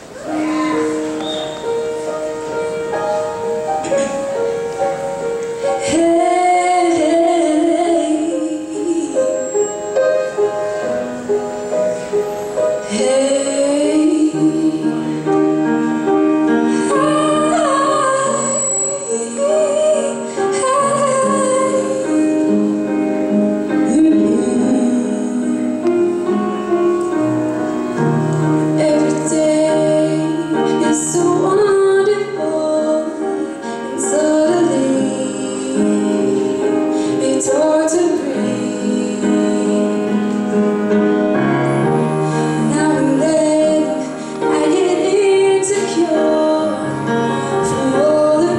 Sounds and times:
Music: 0.0 - 48.5
Female singing: 5.8 - 9.6, 12.9 - 15.5, 16.8 - 22.5, 23.8 - 25.6, 28.8 - 36.6, 37.2 - 40.2, 42.6 - 47.0, 47.6 - 48.5.

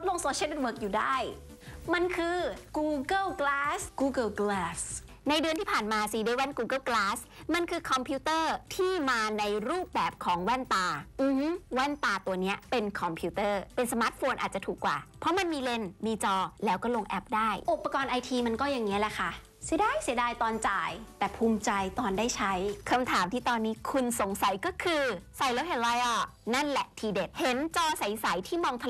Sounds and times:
Speech: 0.0 - 28.8.

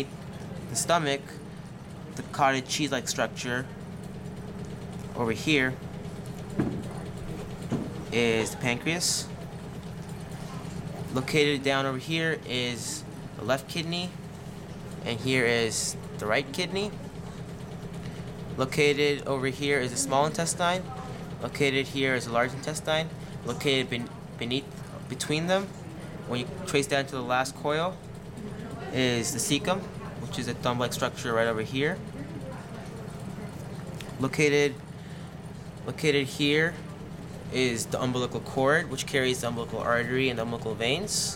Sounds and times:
Speech: 0.7 - 1.4, 2.2 - 3.7, 5.2 - 5.8, 8.1 - 9.3, 11.1 - 14.2, 15.0 - 17.0, 18.6 - 34.8, 35.8 - 41.3.

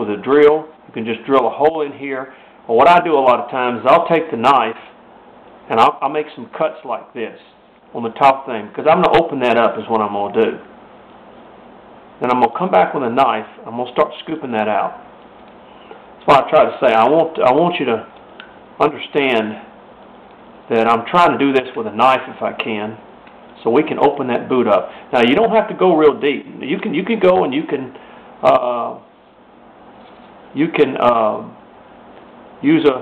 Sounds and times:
Speech: 0.0 - 5.0, 5.7 - 10.7, 12.2 - 15.1, 16.2 - 18.1, 18.8 - 19.8, 20.7 - 29.1, 30.5 - 31.6, 32.6 - 33.0.

